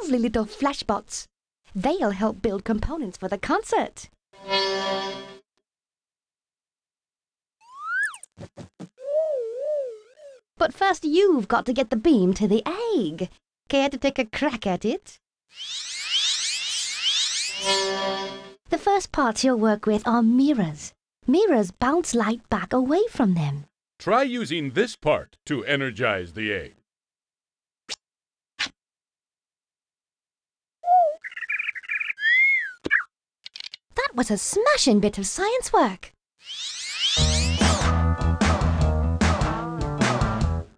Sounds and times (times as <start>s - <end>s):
Speech: 0.0s - 4.1s, 10.6s - 15.2s, 18.8s - 26.8s, 34.0s - 36.1s
Chirp, tweet: 31.0s - 32.8s.